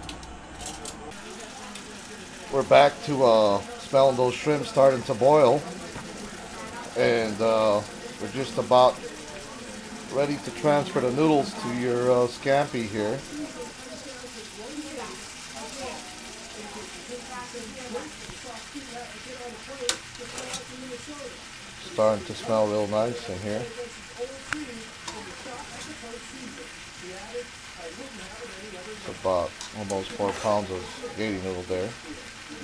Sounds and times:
Boiling: 0:00.0 - 0:32.6
Speech: 0:01.1 - 0:06.0, 0:06.6 - 0:32.6.

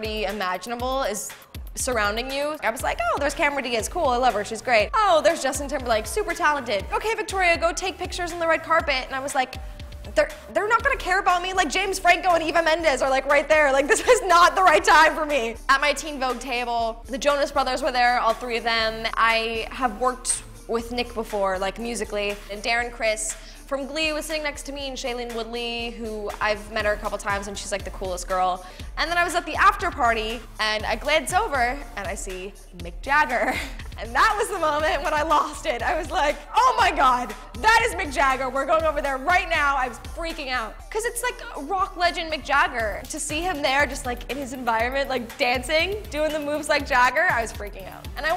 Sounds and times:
Music: 0:00.0 - 0:48.3
Speech: 0:00.0 - 0:48.3.

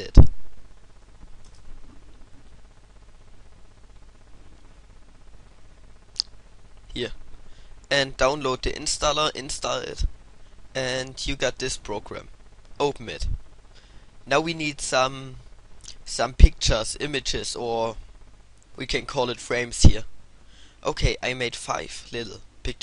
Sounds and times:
Speech: 0:00.0 - 0:00.3, 0:06.9 - 0:07.2, 0:07.9 - 0:10.1, 0:10.8 - 0:13.4, 0:14.3 - 0:18.0, 0:18.8 - 0:20.1, 0:20.8 - 0:22.8.

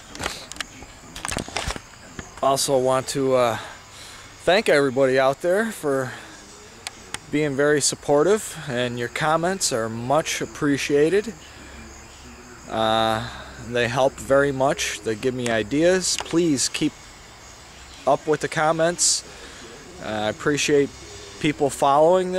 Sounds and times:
Outside, rural or natural: 0:00.0 - 0:22.3
Speech: 0:02.0 - 0:03.7, 0:04.4 - 0:06.4, 0:07.2 - 0:17.0, 0:18.0 - 0:19.3, 0:19.9 - 0:22.3.

